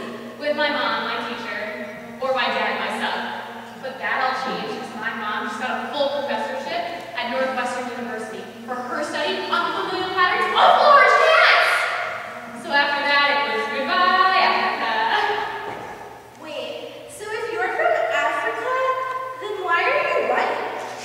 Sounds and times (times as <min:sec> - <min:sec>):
Female speech, woman speaking: 0:00.0 - 0:11.9, 0:12.5 - 0:15.5, 0:16.4 - 0:20.9
Narration, monologue: 0:00.0 - 0:21.0.